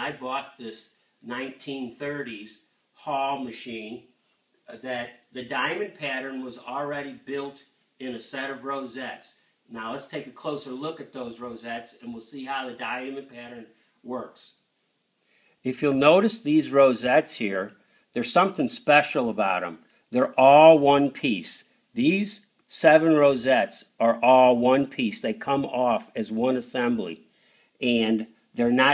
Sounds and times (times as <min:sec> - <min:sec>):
Speech: 0:00.0 - 0:04.1, 0:04.7 - 0:14.6, 0:15.6 - 0:27.2, 0:27.8 - 0:28.9.